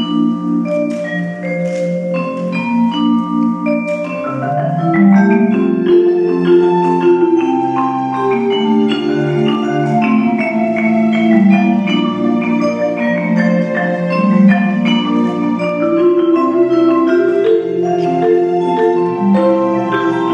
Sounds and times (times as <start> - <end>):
Bell: 0.0 - 20.3
Marimba, xylophone: 0.0 - 20.3
Orchestra: 0.0 - 20.3
Vibraphone: 0.0 - 20.3.